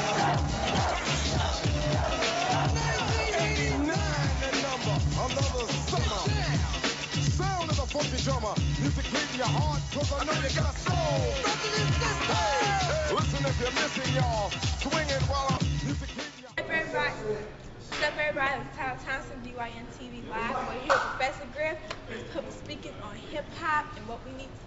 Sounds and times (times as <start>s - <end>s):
Music: 0.0s - 16.6s.